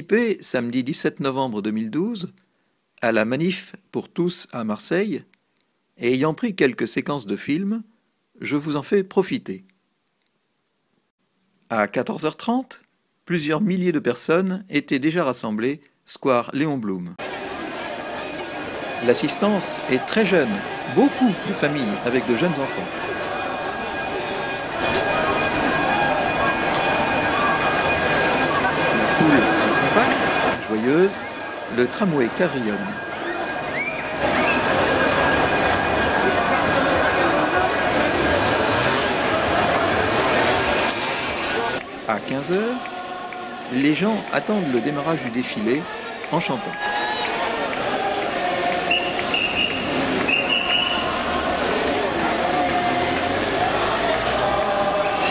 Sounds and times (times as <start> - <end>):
Speech: 0.0 - 2.4, 3.0 - 5.3, 6.0 - 9.7, 11.7 - 17.2, 19.0 - 22.9, 28.4 - 33.0, 41.6 - 43.0, 43.7 - 47.1.